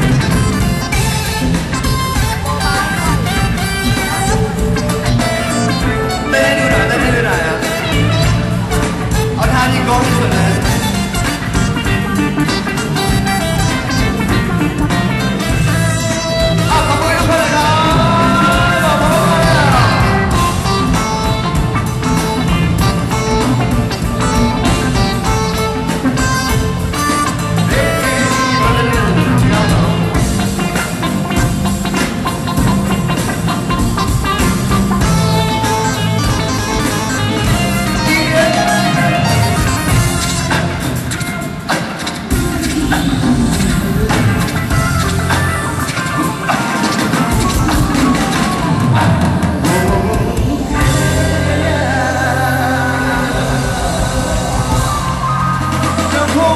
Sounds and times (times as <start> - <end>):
Music: 0.0 - 56.5.